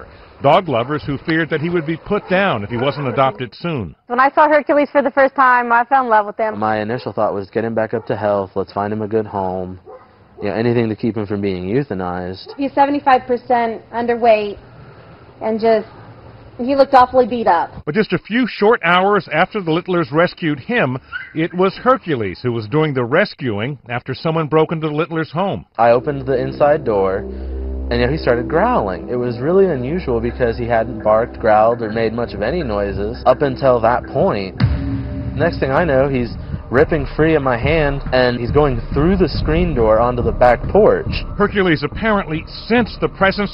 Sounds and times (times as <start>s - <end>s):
Speech: 0.4s - 9.8s, 16.7s - 27.2s, 27.9s - 34.6s, 35.4s - 43.5s.